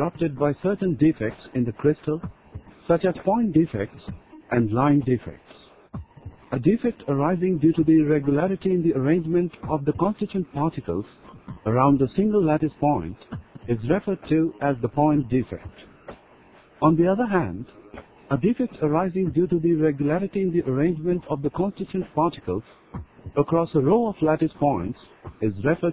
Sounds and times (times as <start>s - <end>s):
Speech: 0.0s - 2.3s, 2.9s - 5.7s, 6.5s - 15.8s, 16.8s - 22.7s, 23.3s - 25.9s.